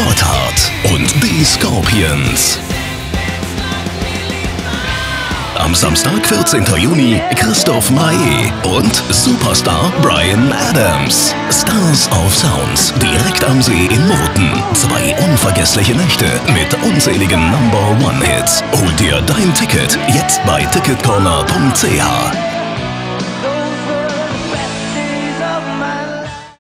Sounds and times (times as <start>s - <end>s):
Speech: 0.0s - 2.6s, 5.6s - 22.5s
Music: 0.0s - 26.6s.